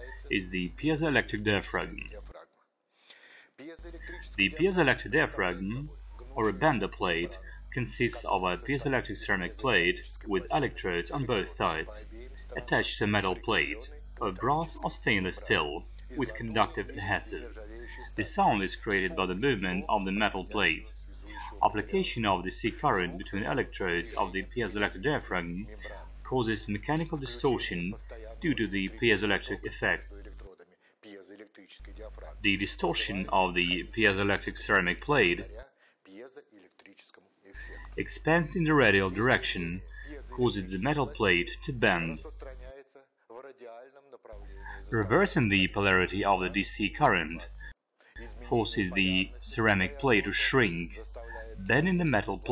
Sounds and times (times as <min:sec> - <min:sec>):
Speech: 0:00.0 - 0:02.6, 0:03.6 - 0:52.5.